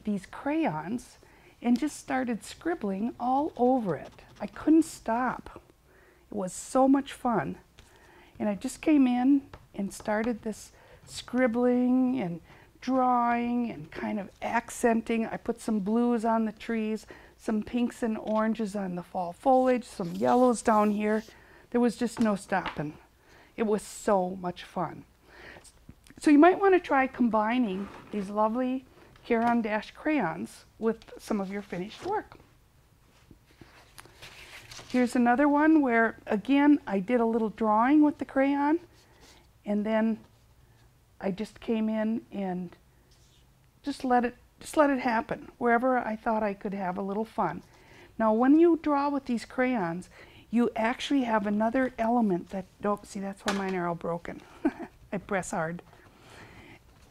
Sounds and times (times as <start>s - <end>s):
Speech: 0.0s - 5.6s, 6.3s - 7.6s, 8.4s - 23.0s, 23.6s - 25.1s, 26.2s - 32.4s, 34.9s - 38.9s, 39.7s - 40.2s, 41.2s - 42.8s, 43.8s - 47.6s, 48.2s - 54.5s, 55.1s - 55.8s.